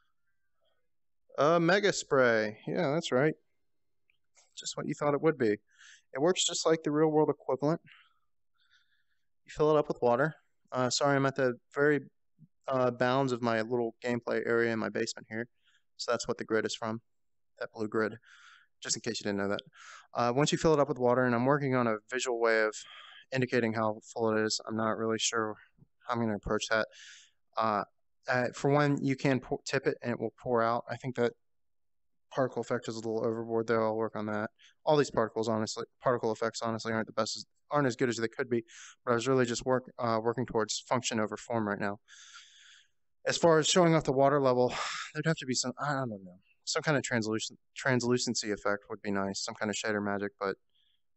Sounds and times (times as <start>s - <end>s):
Speech: 1.4s - 3.4s, 4.6s - 8.0s, 9.5s - 12.1s, 12.7s - 17.0s, 17.6s - 31.3s, 32.3s - 42.1s, 43.3s - 50.6s.